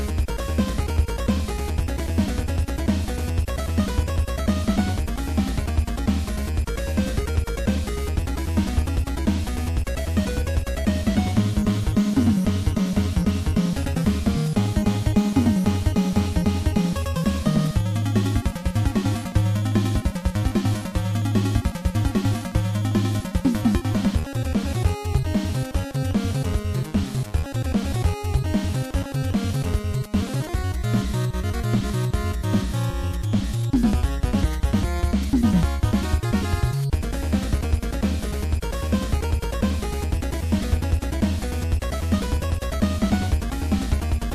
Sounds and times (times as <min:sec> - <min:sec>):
Video game music: 0:00.0 - 0:44.3.